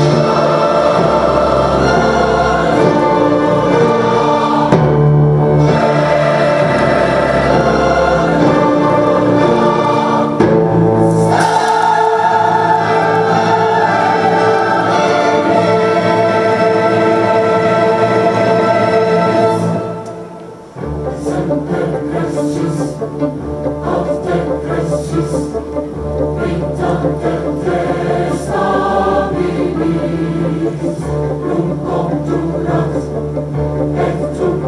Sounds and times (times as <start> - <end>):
Choir: 0.0 - 34.6
Orchestra: 0.0 - 34.6.